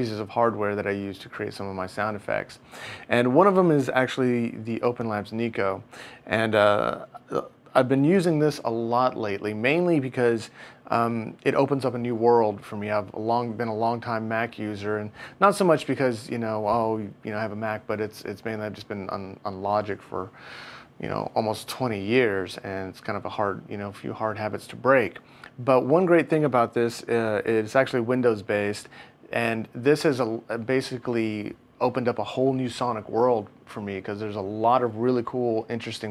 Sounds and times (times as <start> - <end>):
Speech: 0.0 - 20.4, 21.0 - 36.1.